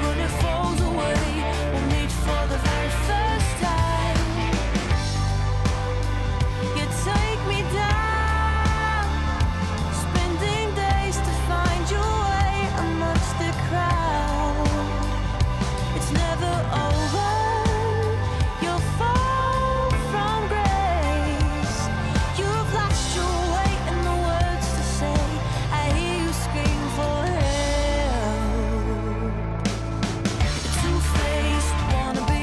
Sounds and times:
Music: 0.0 - 32.4.

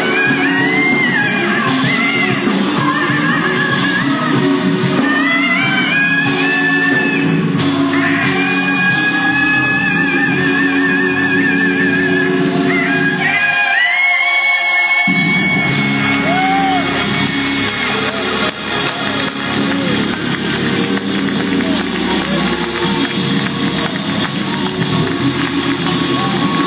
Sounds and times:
Inside, large room or hall: 0.0 - 26.6
Music: 0.0 - 26.6
Bellow: 16.2 - 17.0.

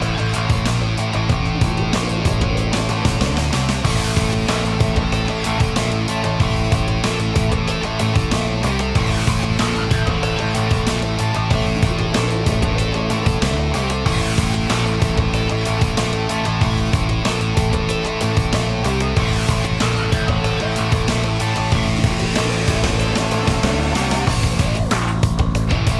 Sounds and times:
Music: 0.0 - 26.0.

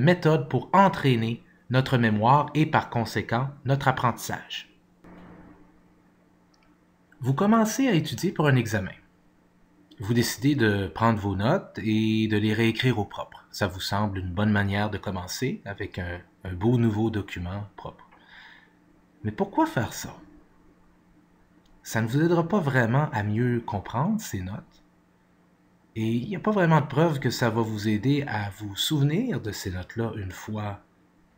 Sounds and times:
Speech: 0.0 - 4.8, 7.2 - 9.1, 10.0 - 18.1, 19.2 - 20.3, 21.8 - 24.8, 25.9 - 30.9.

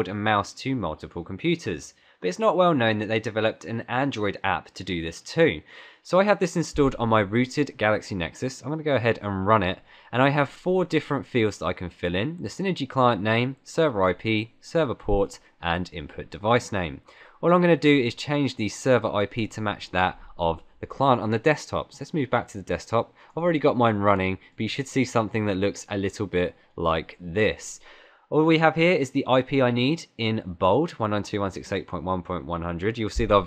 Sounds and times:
Speech: 0.0 - 33.4.

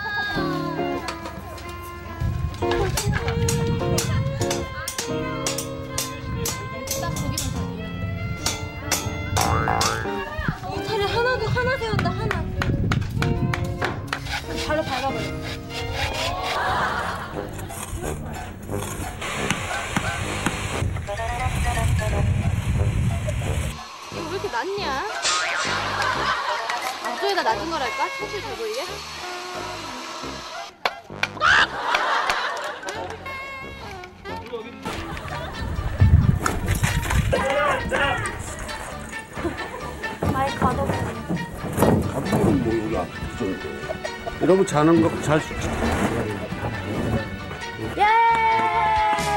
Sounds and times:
Music: 0.0 - 49.3.

